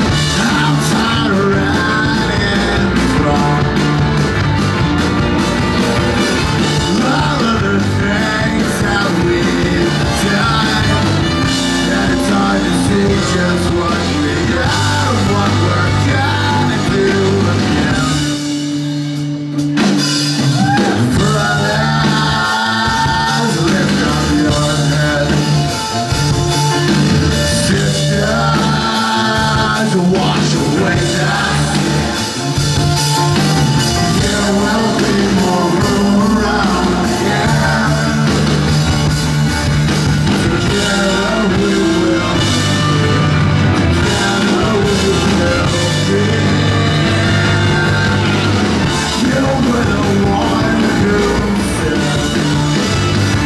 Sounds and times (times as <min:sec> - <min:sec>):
Singing: 0:00.0 - 0:04.0, 0:06.6 - 0:18.5, 0:20.5 - 0:26.0, 0:27.3 - 0:32.5, 0:33.8 - 0:39.0, 0:40.3 - 0:53.4
Rock and roll: 0:00.0 - 0:53.4.